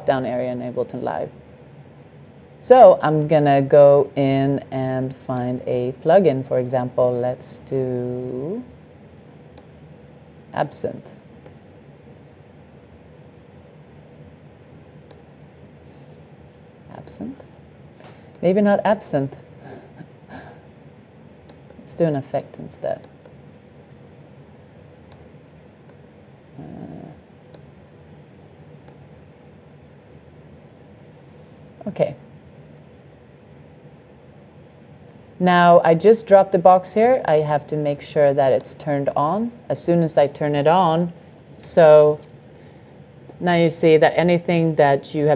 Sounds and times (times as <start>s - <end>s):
Speech: 0.0s - 1.3s, 2.6s - 8.7s, 10.6s - 11.2s, 16.9s - 17.4s, 18.4s - 19.4s, 21.8s - 23.0s, 26.6s - 27.2s, 31.8s - 32.2s, 35.4s - 42.2s, 43.4s - 45.3s.